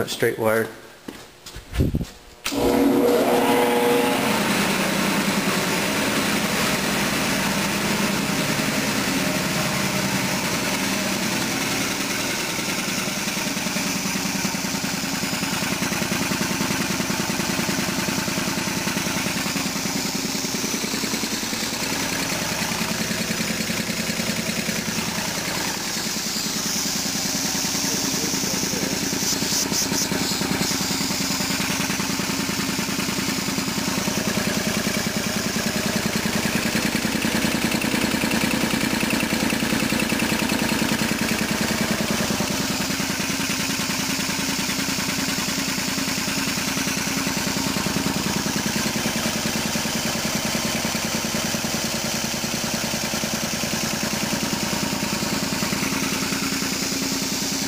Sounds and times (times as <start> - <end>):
Heavy engine (low frequency): 1.8 - 57.6
Idling: 2.5 - 57.6.